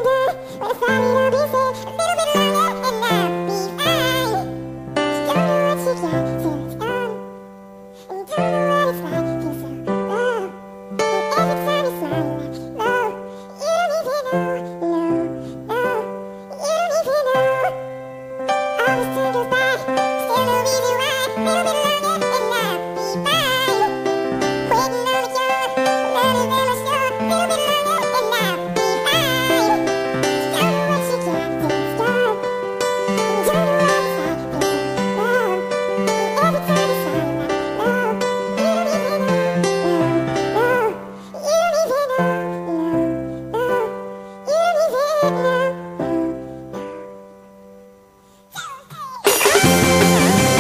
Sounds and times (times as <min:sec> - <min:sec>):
Music: 0:00.0 - 0:50.6.